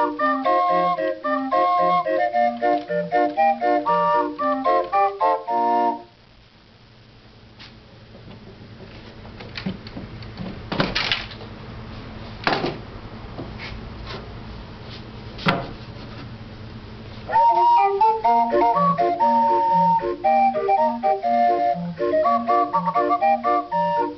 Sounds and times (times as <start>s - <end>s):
Music: 0.0s - 6.2s, 17.3s - 24.1s.